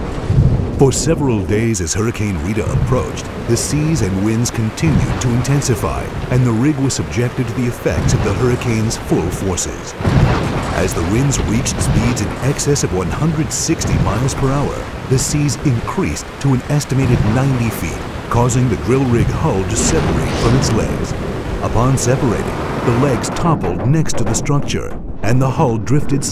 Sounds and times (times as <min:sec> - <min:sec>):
Speech: 0:00.8 - 0:10.0, 0:10.7 - 0:26.3
Boom: 0:04.8 - 0:06.3, 0:10.0 - 0:14.9, 0:18.2 - 0:26.2.